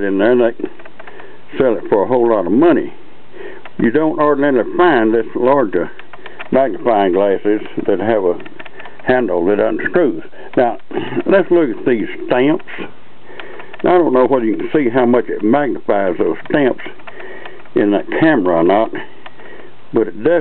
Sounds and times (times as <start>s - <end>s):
Speech: 0.0s - 0.8s, 1.5s - 3.0s, 3.8s - 12.9s, 13.8s - 17.0s, 17.8s - 19.1s, 19.9s - 20.4s.